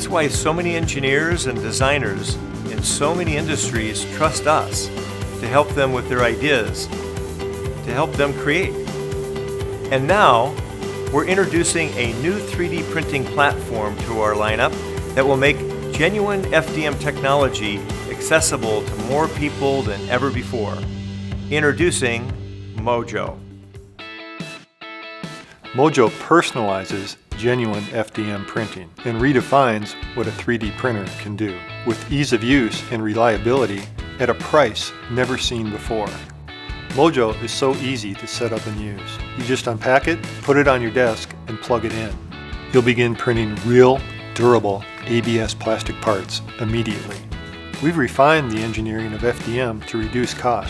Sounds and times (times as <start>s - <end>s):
Speech: 0.0s - 6.9s, 7.8s - 8.8s, 9.9s - 20.9s, 21.5s - 23.4s, 25.8s - 36.3s, 36.9s - 47.2s, 47.8s - 50.7s
Music: 0.0s - 50.7s.